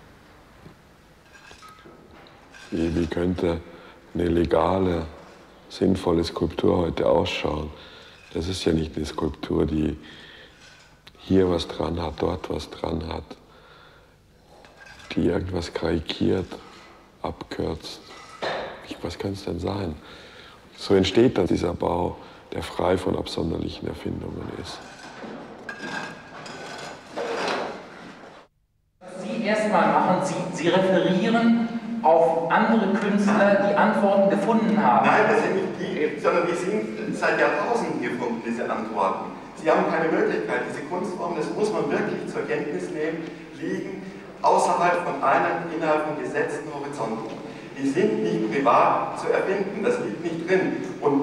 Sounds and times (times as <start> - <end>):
Speech: 2.7 - 10.0, 11.1 - 13.4, 15.1 - 18.1, 18.8 - 20.0, 20.7 - 24.8, 29.0 - 51.2.